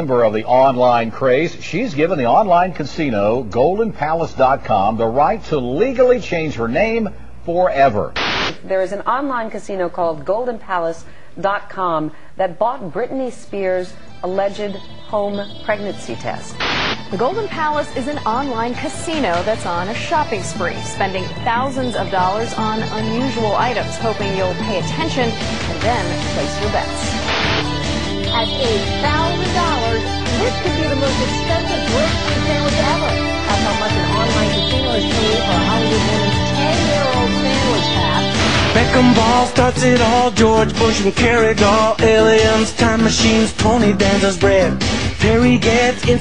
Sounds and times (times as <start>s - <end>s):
Speech: 0.0s - 16.5s, 17.1s - 27.1s, 28.4s - 39.2s
Funny music: 14.2s - 46.2s.